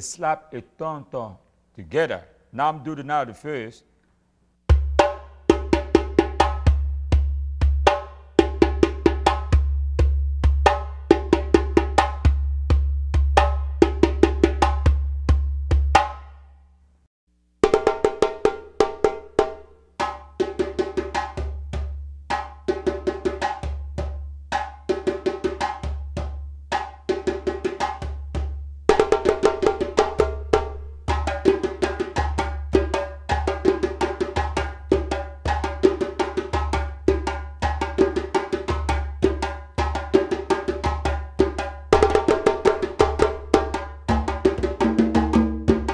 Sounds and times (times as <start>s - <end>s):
Percussion: 4.6s - 16.7s, 17.6s - 45.9s.